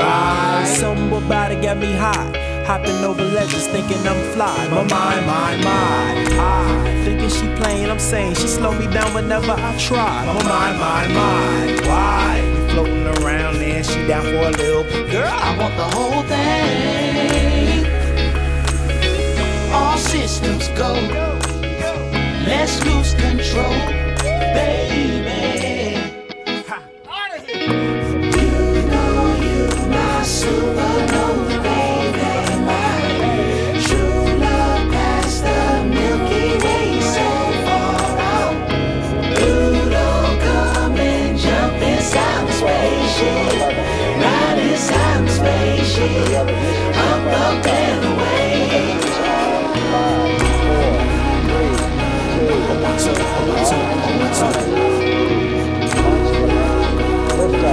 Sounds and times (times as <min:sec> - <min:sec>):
Gospel music: 0:00.0 - 0:57.7.